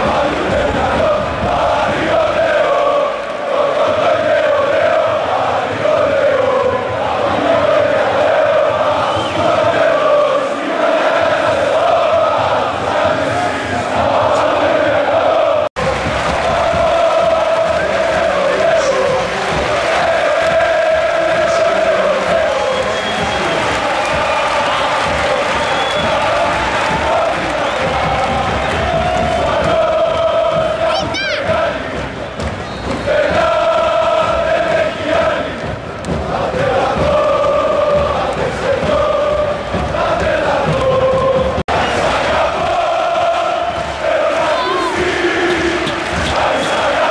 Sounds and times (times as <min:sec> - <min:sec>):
Cheering: 0:00.0 - 0:47.1.